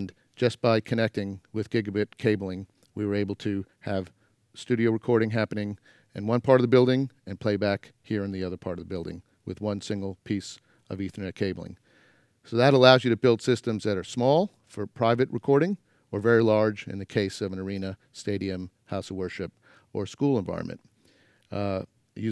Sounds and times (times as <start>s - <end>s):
Speech: 0.0s - 11.8s, 12.5s - 20.8s, 21.5s - 22.3s.